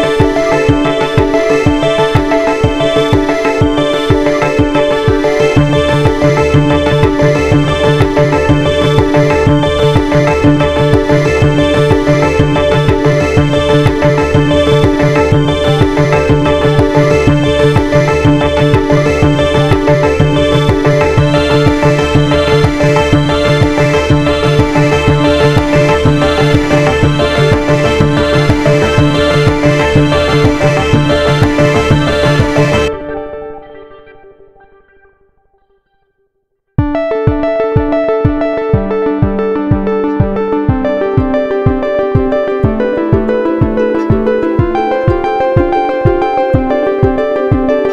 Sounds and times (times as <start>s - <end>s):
Synthesizer: 0.0s - 36.2s, 36.8s - 47.9s.